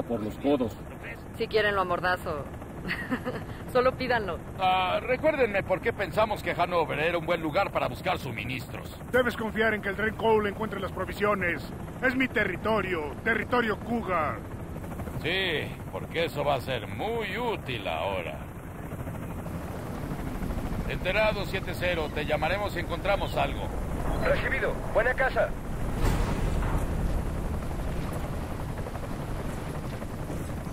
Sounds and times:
Speech: 20.9 - 25.6.

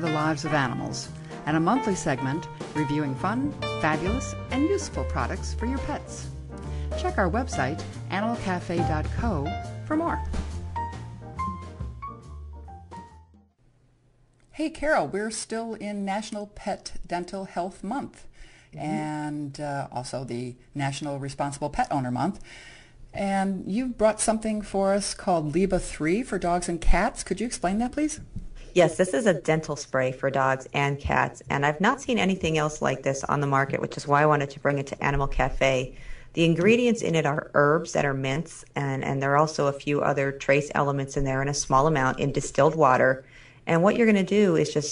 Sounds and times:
Speech: 0.0 - 6.3, 7.0 - 10.3, 14.5 - 22.4, 23.2 - 44.9.

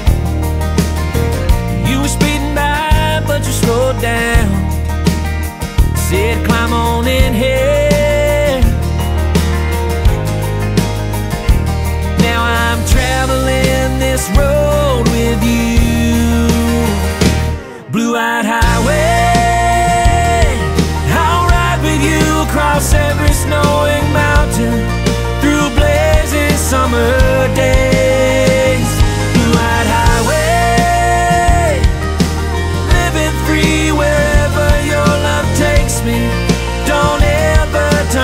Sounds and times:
Bluegrass: 0.0 - 38.2
Blues: 0.0 - 38.2
Soundtrack music: 0.0 - 38.2.

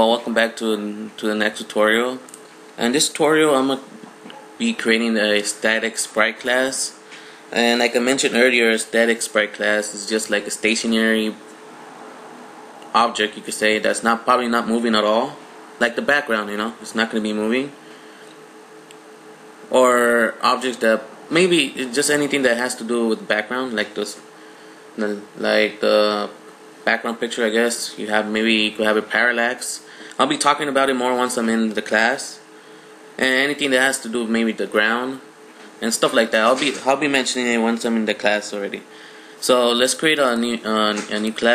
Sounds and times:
Speech: 0.0 - 11.4, 12.9 - 17.8, 19.7 - 24.2, 25.0 - 32.5, 33.2 - 41.5.

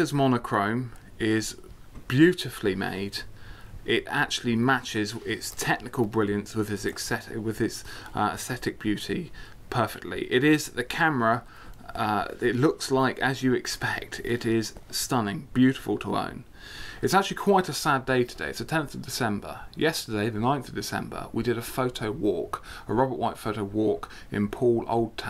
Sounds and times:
Speech: 0.0 - 25.3.

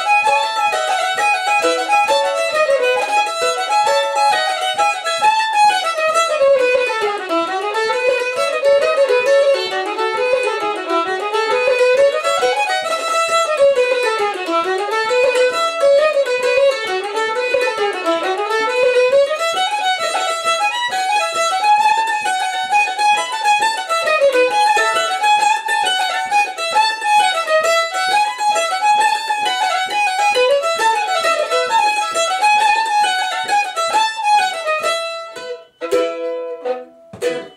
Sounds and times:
Violin, fiddle: 0.0 - 37.5.

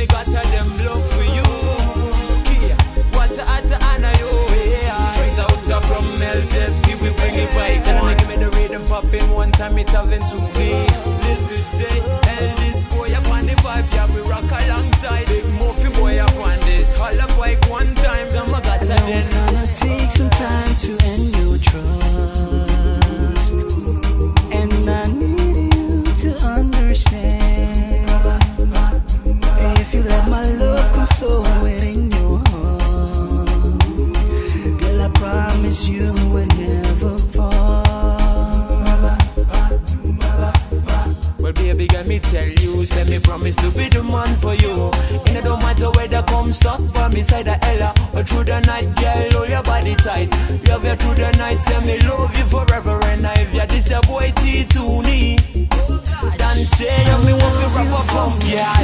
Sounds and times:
Music: 0.0 - 58.8.

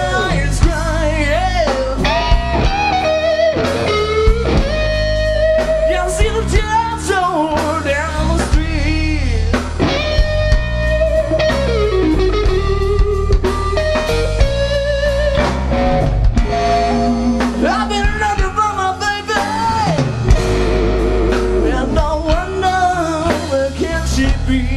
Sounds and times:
Music: 0.0 - 24.7.

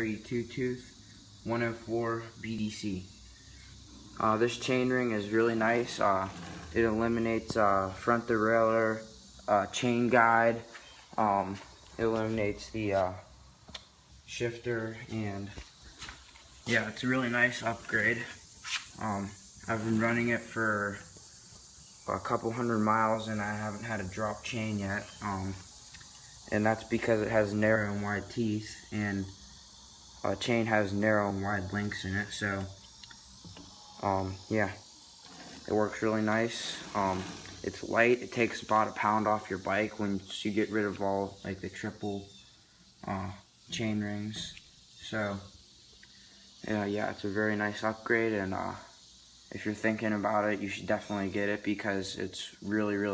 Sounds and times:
Speech: 0.0 - 3.1, 4.2 - 13.3, 14.3 - 15.6, 16.7 - 18.4, 19.0 - 21.1, 22.1 - 25.6, 26.5 - 29.3, 30.3 - 32.8, 34.0 - 34.8, 35.7 - 42.3, 43.0 - 45.5, 46.6 - 48.9, 49.5 - 53.1.

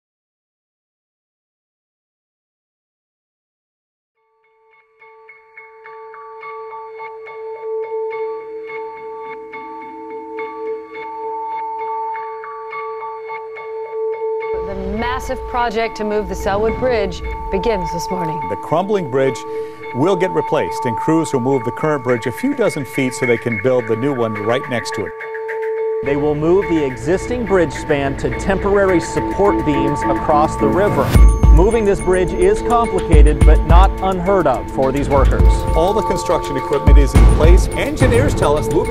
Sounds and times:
Music: 4.2 - 38.9.

